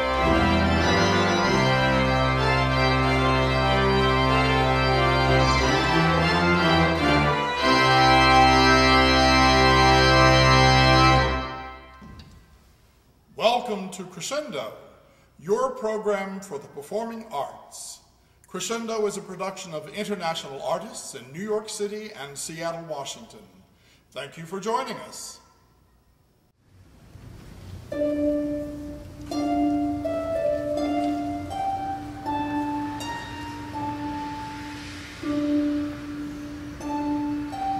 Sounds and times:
Music: 0.0s - 12.3s, 27.8s - 37.7s
Speech: 13.4s - 25.5s.

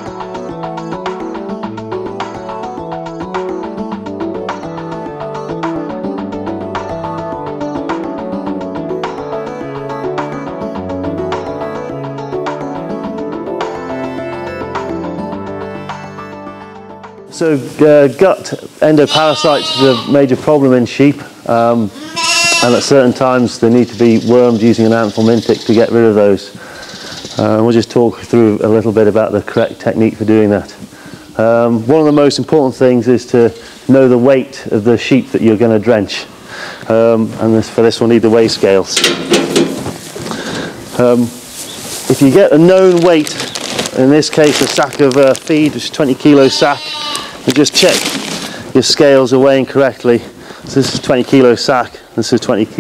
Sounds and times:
Speech: 17.3s - 22.0s, 22.6s - 26.6s, 27.4s - 30.8s, 31.4s - 36.3s, 36.9s - 39.1s, 41.0s - 41.4s, 42.1s - 43.4s, 44.0s - 46.9s, 47.5s - 48.0s, 48.8s - 52.8s.

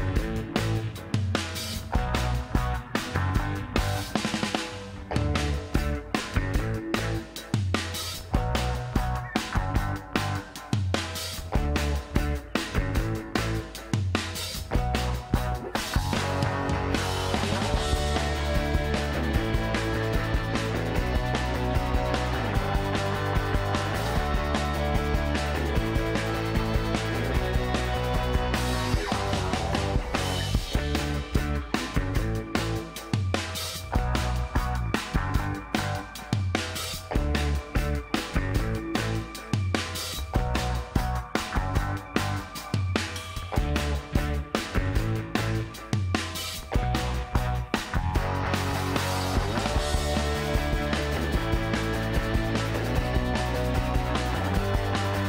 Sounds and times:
Music: 0.0s - 55.2s.

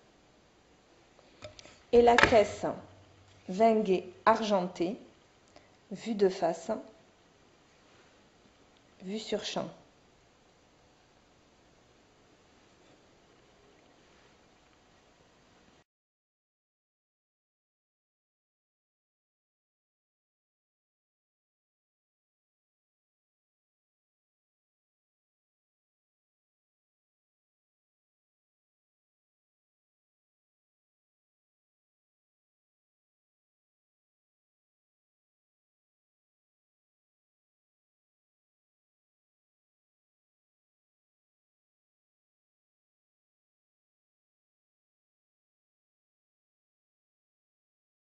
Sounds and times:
Speech: 2.0s - 2.9s, 3.5s - 5.1s, 5.9s - 7.0s, 9.0s - 9.8s.

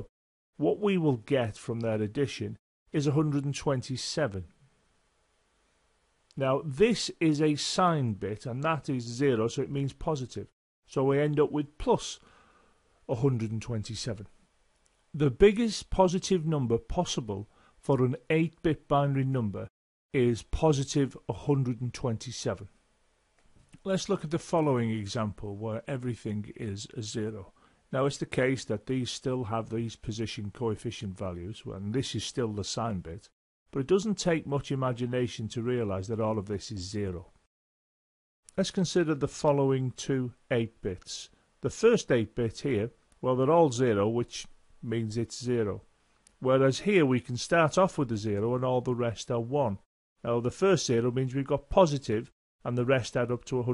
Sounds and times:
Speech: 0.0s - 4.6s, 6.3s - 12.2s, 13.1s - 14.4s, 15.1s - 22.8s, 23.8s - 37.4s, 38.5s - 53.7s.

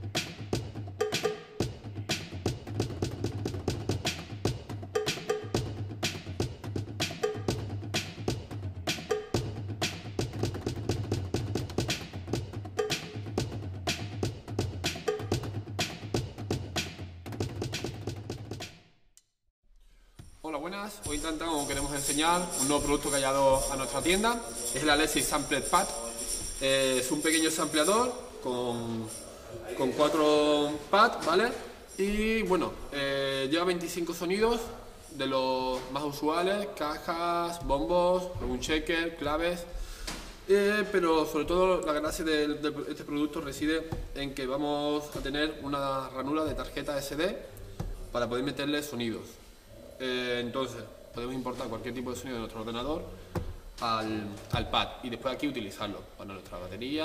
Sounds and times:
Music: 0.0s - 30.9s, 32.1s - 54.9s
Speech: 20.5s - 39.7s, 40.5s - 47.4s, 48.2s - 49.4s, 50.0s - 53.1s, 53.8s - 57.0s.

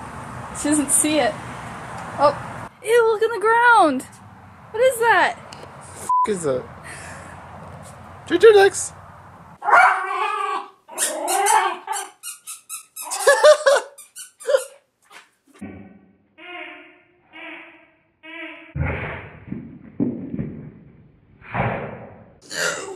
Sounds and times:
Canidae, dogs, wolves: 9.6s - 12.2s.

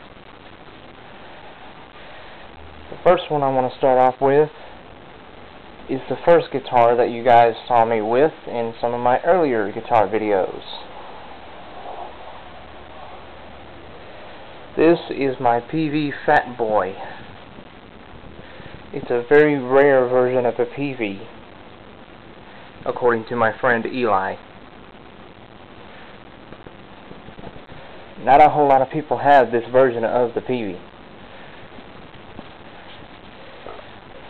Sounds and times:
Speech: 3.0s - 4.6s, 5.9s - 10.9s, 14.8s - 17.2s, 18.9s - 21.3s, 22.8s - 24.4s, 28.2s - 30.8s.

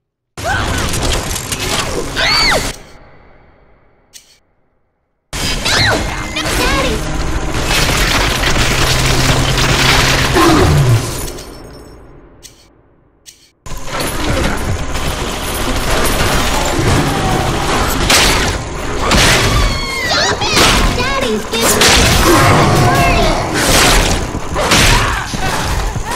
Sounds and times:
Speech: 20.1s - 23.6s.

